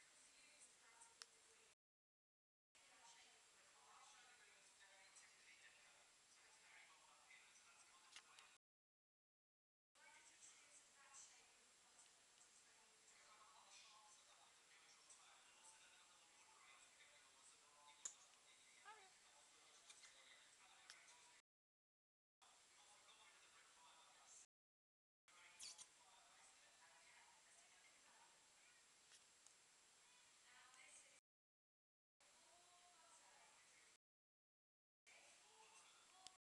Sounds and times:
Speech: 0.0s - 1.8s, 2.8s - 8.6s, 10.0s - 21.4s, 22.4s - 24.5s, 25.3s - 29.0s, 30.0s - 31.2s, 32.2s - 34.0s, 35.1s - 36.4s.

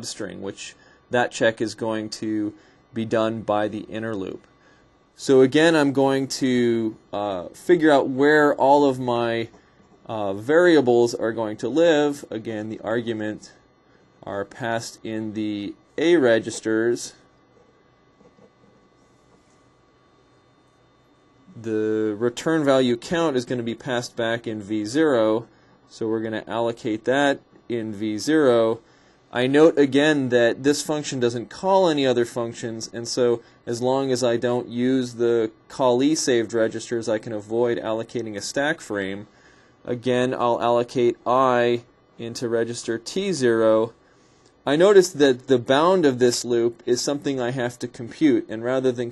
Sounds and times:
Speech: 0.0s - 4.5s, 5.2s - 13.6s, 14.2s - 17.3s, 21.5s - 44.0s, 44.6s - 49.1s.

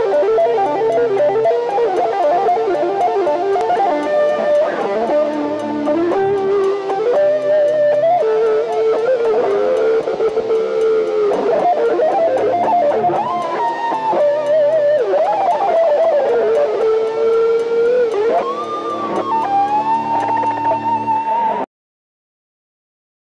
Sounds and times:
Strum: 0.0s - 21.7s.

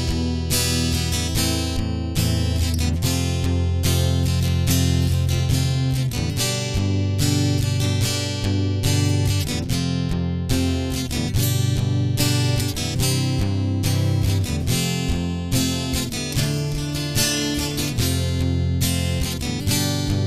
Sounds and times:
Acoustic guitar: 0.0s - 20.2s
Strum: 0.0s - 20.2s.

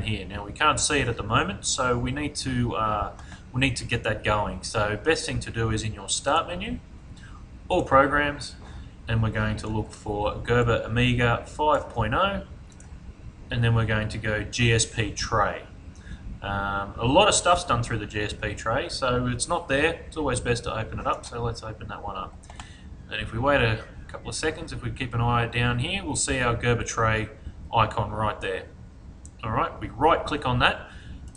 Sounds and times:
Speech: 0.0s - 6.8s, 7.7s - 12.5s, 13.5s - 15.7s, 16.4s - 22.4s, 23.1s - 28.8s, 29.4s - 30.9s.

